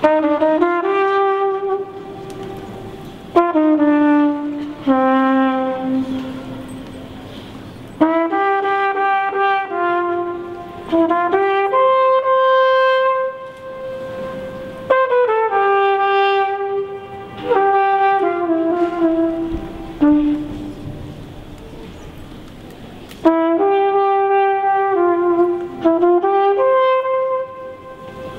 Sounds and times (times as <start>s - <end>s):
Inside, large room or hall: 0.0s - 28.3s.